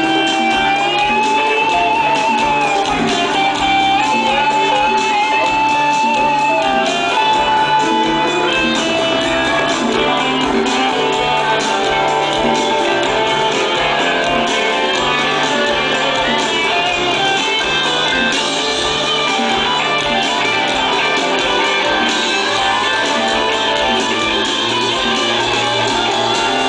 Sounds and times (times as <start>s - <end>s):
Music: 0.0s - 26.6s.